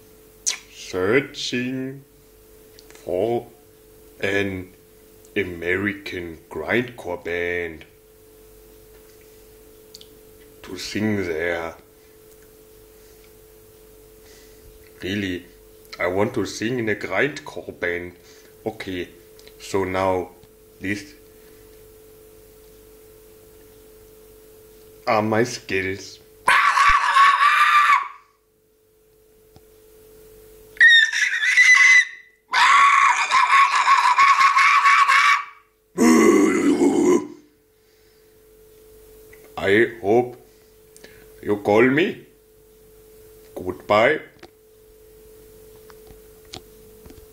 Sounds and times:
Inside, small room: 0.0s - 47.3s
Speech: 0.7s - 2.1s, 3.0s - 3.6s, 4.2s - 4.8s, 5.4s - 7.9s, 10.6s - 11.8s, 15.0s - 21.2s, 25.0s - 26.2s, 39.6s - 40.4s, 41.4s - 42.3s, 43.5s - 44.4s.

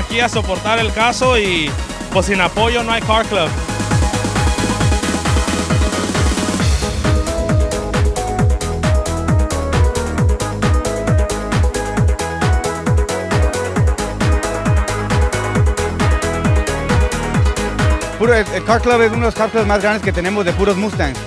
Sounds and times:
Trance music: 0.0s - 19.8s.

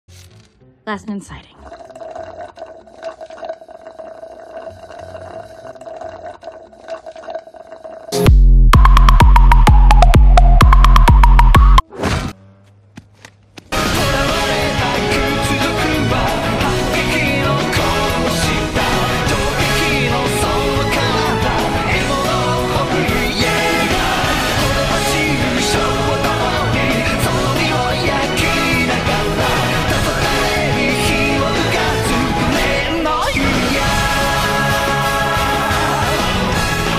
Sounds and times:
Music: 0.2s - 1.2s, 8.2s - 11.8s, 13.7s - 36.9s
Speech: 0.9s - 1.6s.

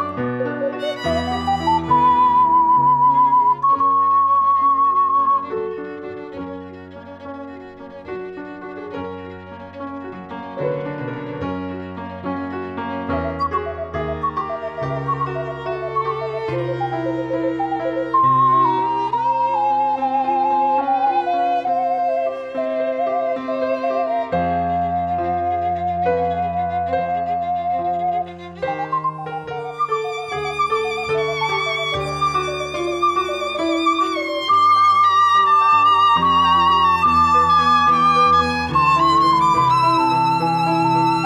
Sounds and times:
Piano: 0.0s - 41.2s.

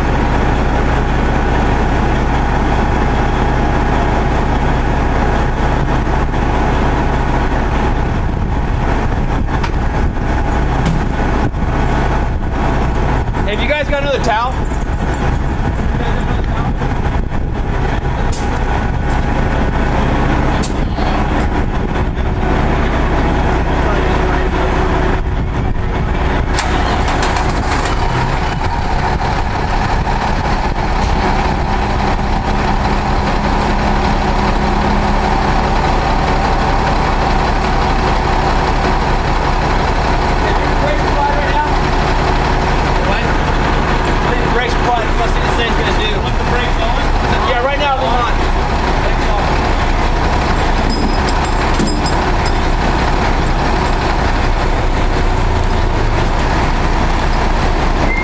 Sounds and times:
Speech: 13.4s - 14.6s, 15.9s - 17.0s, 23.8s - 24.6s, 40.4s - 41.8s, 43.0s - 43.4s, 44.2s - 50.0s.

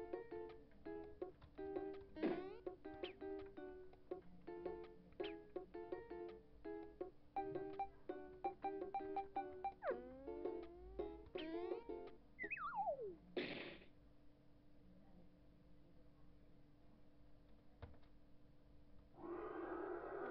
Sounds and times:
Music: 0.0s - 12.6s.

